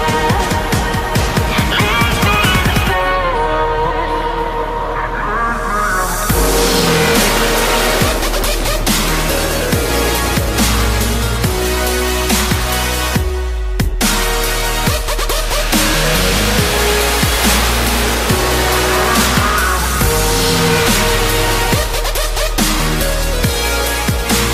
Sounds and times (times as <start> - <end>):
Music: 0.0 - 24.5.